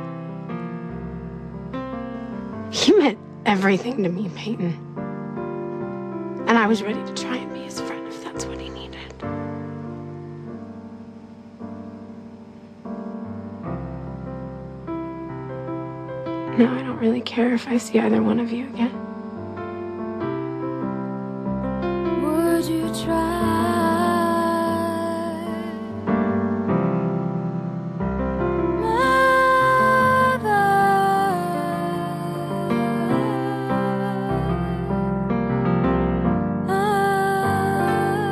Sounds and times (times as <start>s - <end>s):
Music: 0.0s - 38.3s.